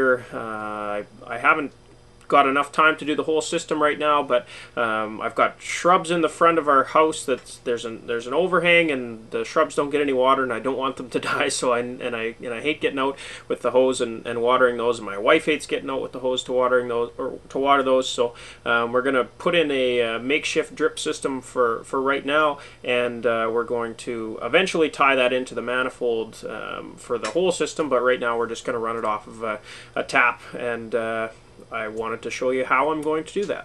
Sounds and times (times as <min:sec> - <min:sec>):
Speech: 0:00.0 - 0:33.6.